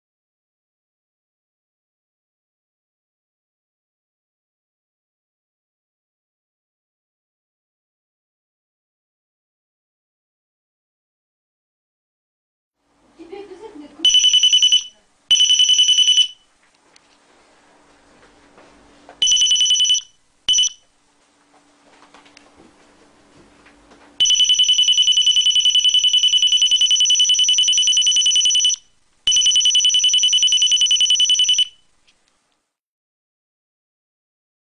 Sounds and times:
Speech: 13.2s - 14.1s.

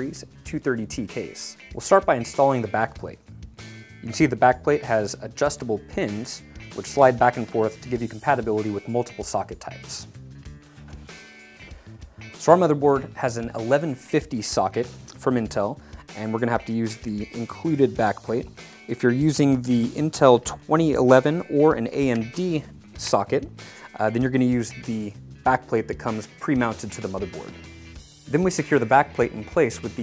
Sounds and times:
Speech: 0.0s - 3.2s, 4.0s - 10.1s, 12.4s - 27.6s, 28.3s - 30.0s
Music: 0.0s - 30.0s.

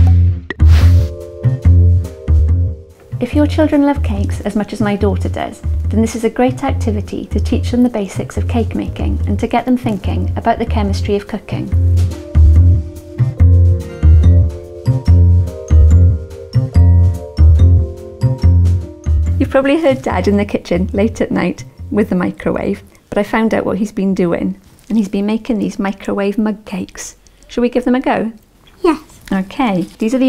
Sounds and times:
Music: 0.0s - 24.0s
Speech: 3.2s - 11.8s, 19.4s - 30.2s.

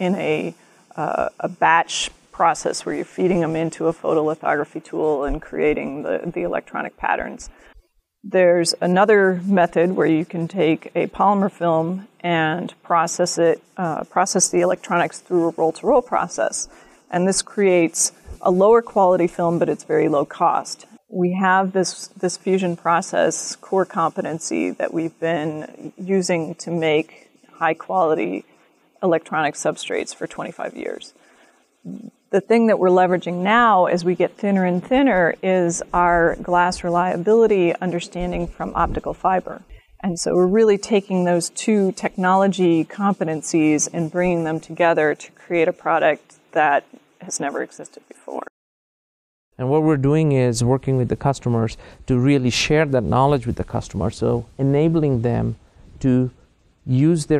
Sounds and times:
Speech: 0.0s - 7.5s, 8.3s - 28.4s, 29.0s - 31.1s, 31.9s - 48.5s, 49.6s - 56.3s, 56.9s - 57.4s.

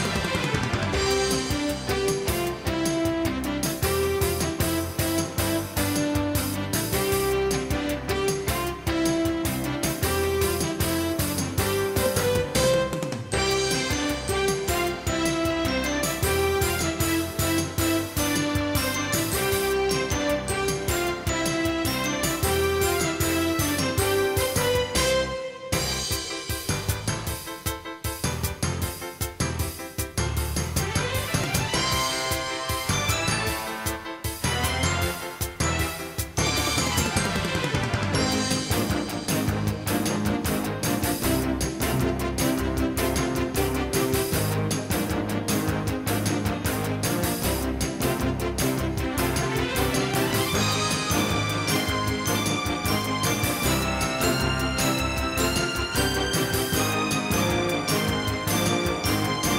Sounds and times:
Music: 0.0s - 59.5s.

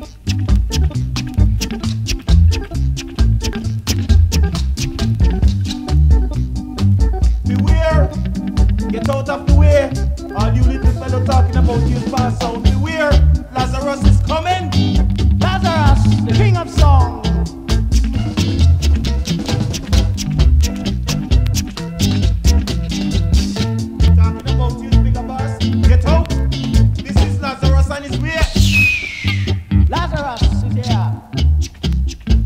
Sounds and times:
Reggae: 0.0s - 32.4s.

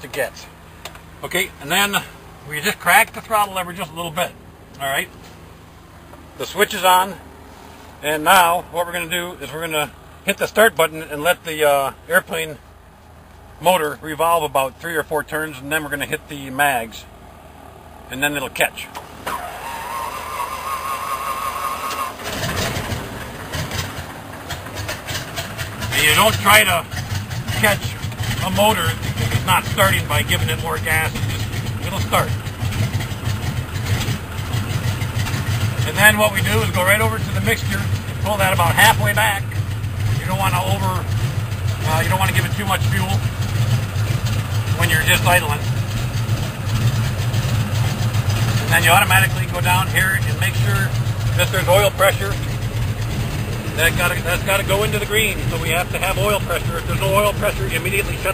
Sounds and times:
Speech: 0.0s - 0.5s, 1.2s - 5.1s, 6.4s - 7.2s, 8.0s - 12.6s, 13.6s - 17.1s, 18.1s - 19.0s, 25.9s - 26.9s, 27.5s - 32.4s, 35.8s - 39.6s, 40.2s - 41.1s, 41.8s - 43.2s, 44.8s - 45.6s, 48.7s - 52.4s, 53.8s - 58.3s
Aircraft: 21.9s - 35.8s, 36.7s - 38.2s, 49.4s - 54.3s.

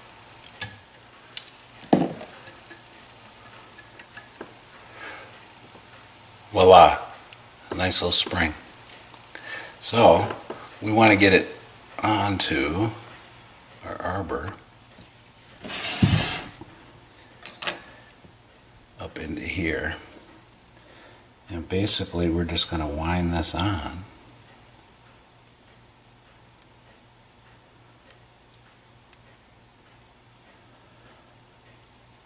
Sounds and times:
Speech: 6.5s - 8.6s, 9.8s - 13.0s, 13.8s - 14.6s, 19.0s - 20.1s, 21.5s - 24.2s.

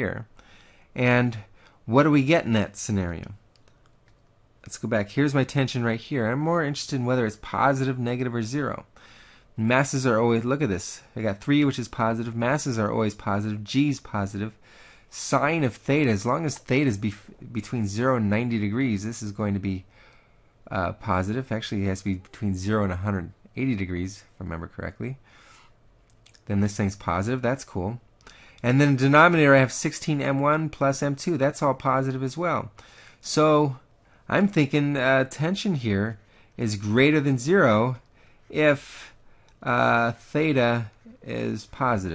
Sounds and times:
Speech: 0.0s - 0.3s, 1.0s - 3.4s, 4.6s - 8.9s, 9.6s - 19.9s, 20.6s - 25.2s, 26.3s - 28.0s, 28.6s - 42.1s.

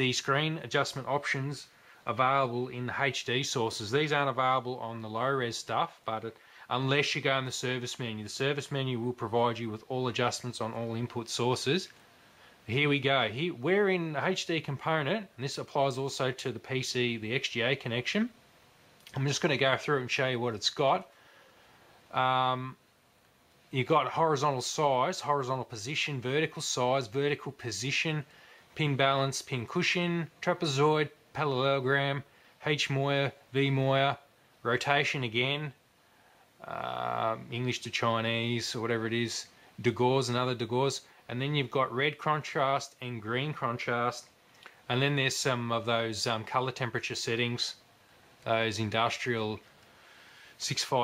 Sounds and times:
Speech: 0.0s - 12.0s, 12.7s - 18.4s, 19.1s - 21.1s, 22.1s - 22.8s, 23.7s - 35.8s, 36.6s - 47.8s, 48.4s - 49.7s, 50.6s - 51.0s.

